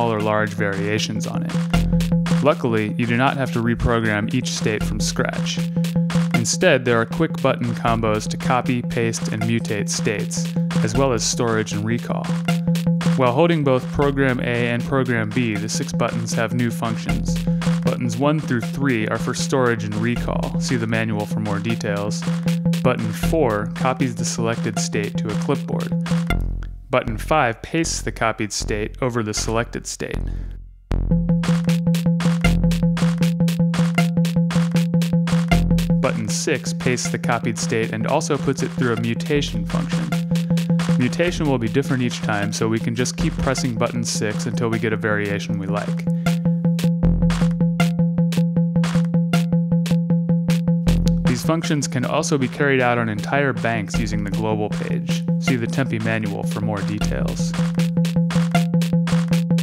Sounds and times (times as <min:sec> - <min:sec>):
Speech: 0:00.0 - 0:01.6, 0:02.4 - 0:05.6, 0:06.4 - 0:12.4, 0:13.2 - 0:26.0, 0:26.9 - 0:30.3, 0:36.0 - 0:40.2, 0:41.0 - 0:46.1, 0:51.3 - 0:57.6.